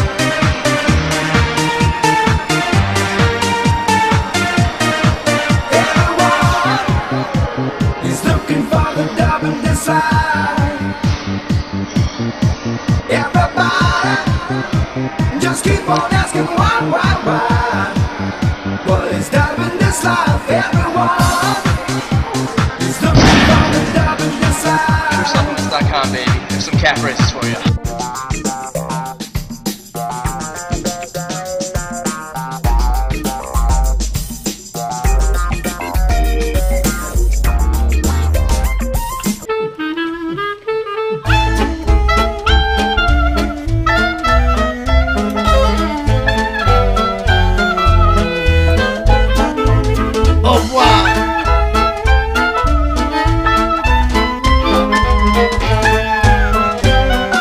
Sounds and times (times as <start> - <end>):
Brass instrument: 0.0 - 29.2, 31.8 - 57.4.